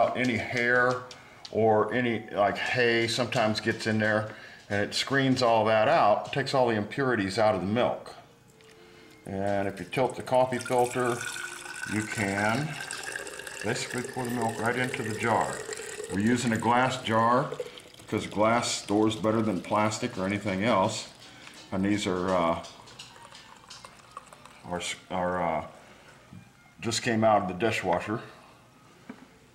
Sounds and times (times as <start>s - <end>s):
Speech: 0.0s - 8.2s, 9.3s - 11.2s, 11.9s - 12.8s, 13.6s - 22.7s, 24.6s - 25.7s, 26.8s - 28.3s.